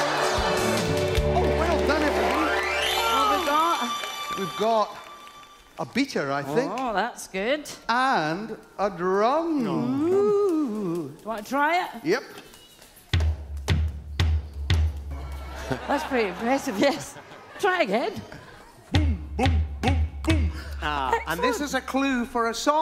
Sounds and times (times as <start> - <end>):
Music: 0.0 - 5.8, 12.9 - 16.3, 18.9 - 22.0.